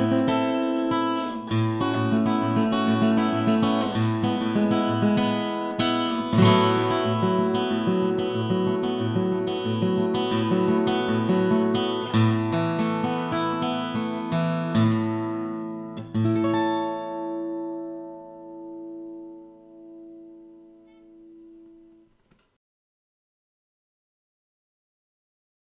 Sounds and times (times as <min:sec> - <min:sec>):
Acoustic guitar: 0:00.0 - 0:22.5.